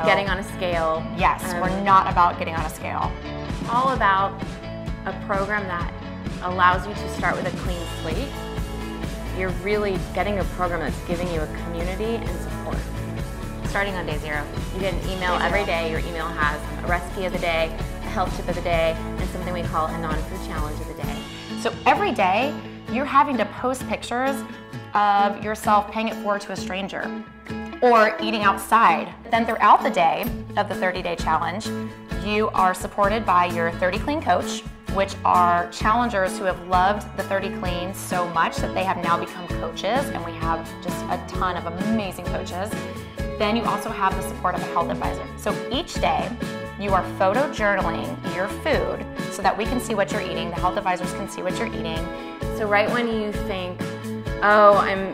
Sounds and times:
Speech: 0.0s - 3.1s, 3.7s - 4.4s, 5.1s - 8.3s, 9.4s - 12.8s, 13.7s - 27.1s, 27.8s - 53.8s, 54.4s - 55.1s
Music: 0.0s - 55.1s.

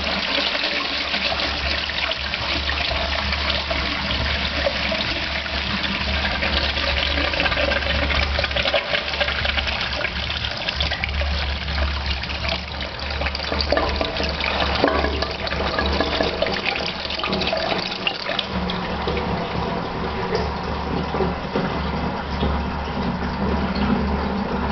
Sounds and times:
Toilet flush: 0.0s - 24.7s.

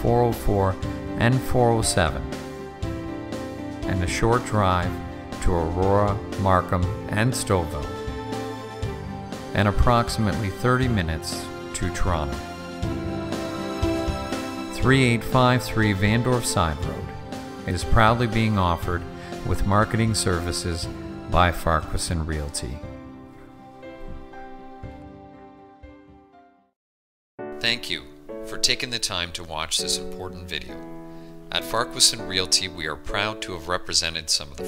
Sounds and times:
Narration, monologue: 0.0s - 23.7s, 27.5s - 34.6s.

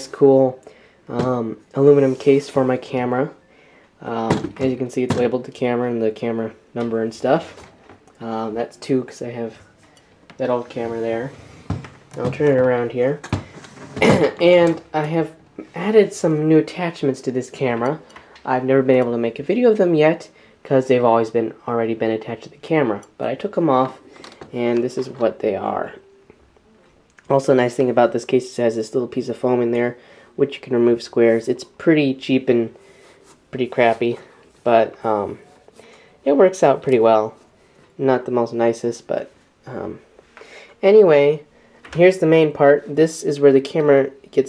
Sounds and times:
Speech: 0.0s - 3.4s, 4.0s - 7.6s, 8.2s - 9.7s, 10.4s - 11.4s, 12.2s - 13.2s, 14.0s - 26.0s, 27.2s - 32.8s, 33.5s - 37.4s, 38.0s - 40.1s, 40.8s - 44.4s.

